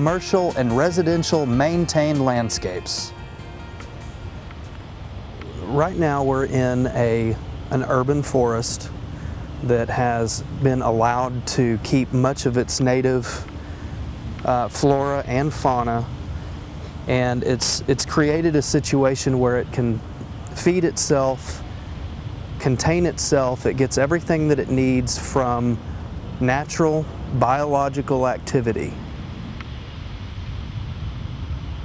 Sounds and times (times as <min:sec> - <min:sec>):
Speech: 0:00.0 - 0:03.1, 0:05.4 - 0:08.9, 0:09.6 - 0:13.5, 0:14.4 - 0:16.1, 0:17.1 - 0:21.6, 0:22.6 - 0:25.8, 0:26.4 - 0:29.0.